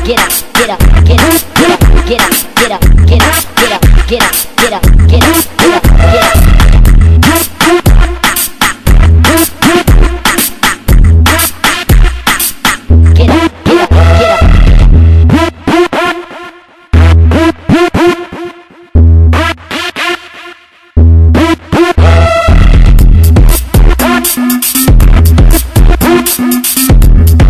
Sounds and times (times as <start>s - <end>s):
Techno: 0.0s - 27.4s.